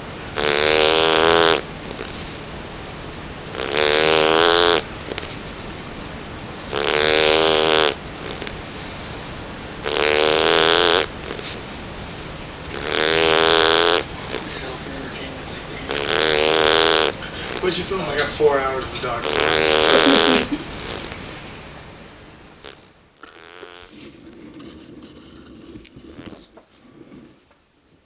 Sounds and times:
Snoring: 0.4 - 2.3, 3.5 - 5.4, 6.7 - 11.6, 12.7 - 17.6, 19.2 - 21.2, 24.6 - 27.4
Speech: 14.2 - 16.6, 17.2 - 20.5.

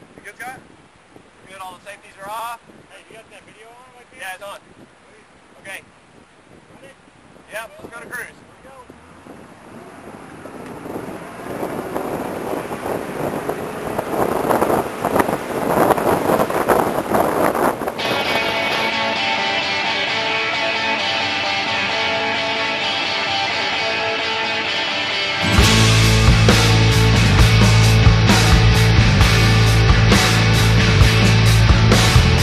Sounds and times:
Outside, rural or natural: 0.0 - 32.4
Music: 18.0 - 32.4.

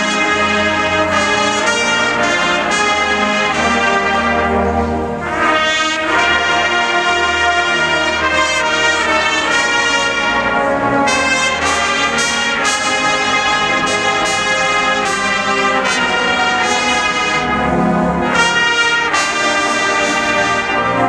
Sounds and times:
Music: 0.0 - 21.0.

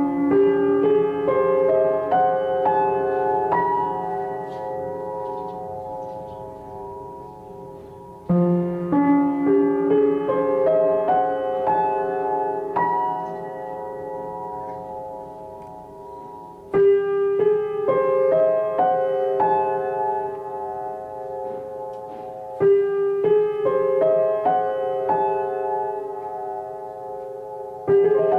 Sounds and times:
Piano: 0.0 - 28.3.

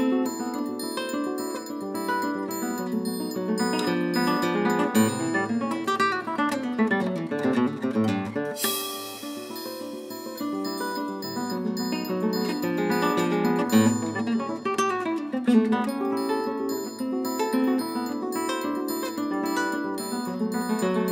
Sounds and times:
Percussion: 0.0 - 7.2, 8.1 - 21.1.

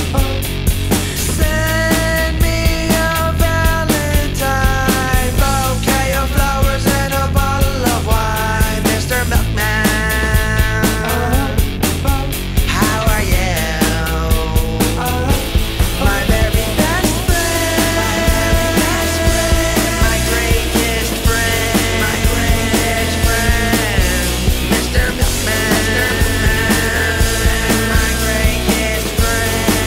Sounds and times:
Music: 0.0 - 29.8.

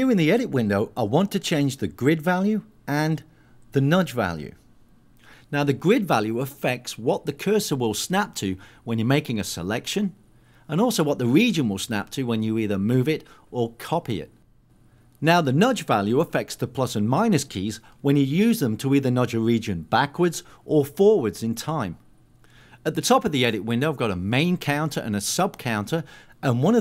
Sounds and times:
Speech: 0.0 - 4.6, 5.5 - 14.4, 15.2 - 22.0, 22.8 - 26.8.

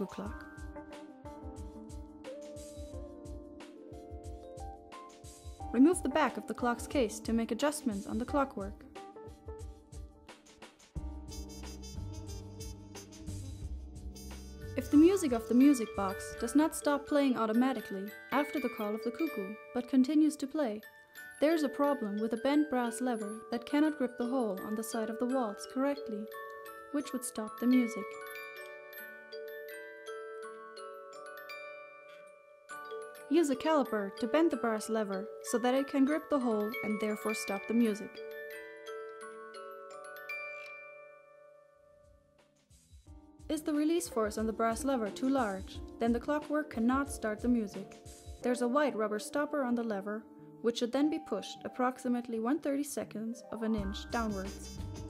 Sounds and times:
Speech: 0.0 - 0.5, 5.7 - 8.8, 14.8 - 20.8, 21.4 - 26.3, 27.0 - 28.1, 33.3 - 38.2, 43.5 - 54.7
Music: 0.0 - 55.0.

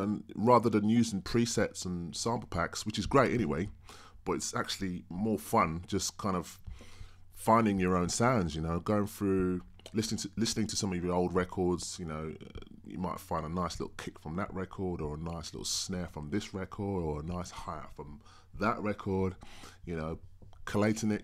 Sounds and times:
Speech: 0.0 - 6.6, 7.4 - 21.2.

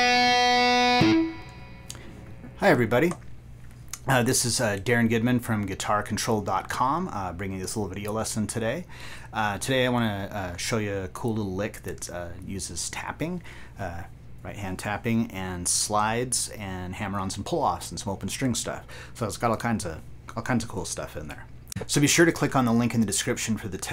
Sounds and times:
Speech: 2.6 - 3.2, 4.0 - 23.9.

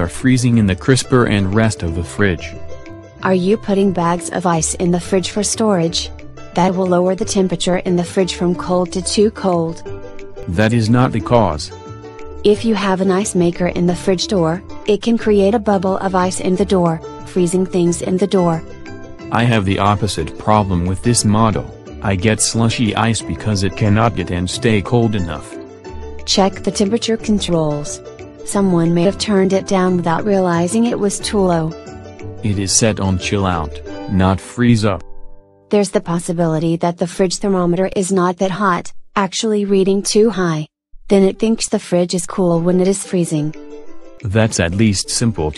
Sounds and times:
Speech synthesizer: 0.0 - 2.5, 3.2 - 9.8, 10.5 - 11.7, 12.5 - 18.6, 19.4 - 25.5, 26.3 - 31.7, 32.5 - 35.0, 35.8 - 43.5, 44.3 - 45.5.

